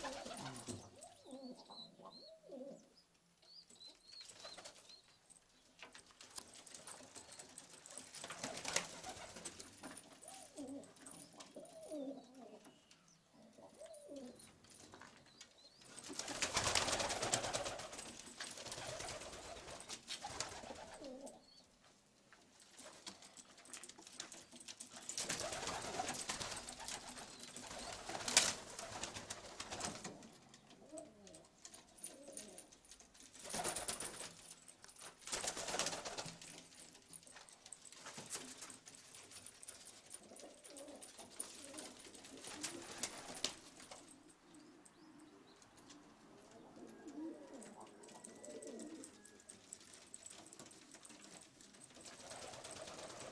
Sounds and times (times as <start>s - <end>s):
Pigeon, dove: 0.0s - 21.8s, 22.6s - 53.3s.